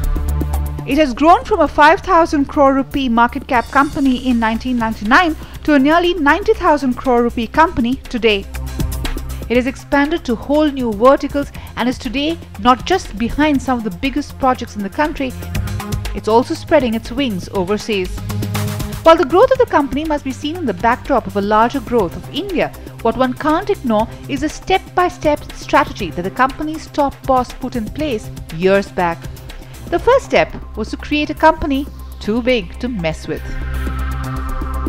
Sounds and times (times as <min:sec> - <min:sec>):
Music: 0:00.0 - 0:34.8
Speech: 0:00.9 - 0:08.5, 0:09.5 - 0:15.4, 0:16.2 - 0:18.2, 0:19.1 - 0:29.2, 0:29.9 - 0:33.6.